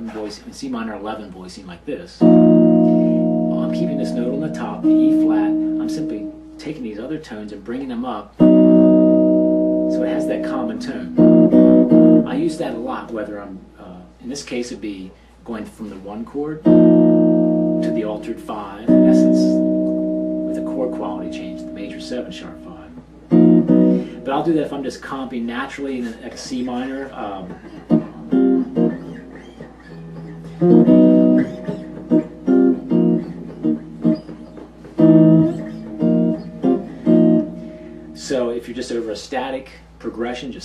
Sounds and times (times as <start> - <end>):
Speech: 0.0 - 2.3, 3.5 - 8.4, 9.9 - 11.2, 12.2 - 16.7, 17.8 - 19.6, 20.5 - 23.0, 24.2 - 27.7, 38.2 - 40.6
Music: 2.2 - 6.7, 8.4 - 13.2, 16.6 - 24.5, 27.6 - 38.6.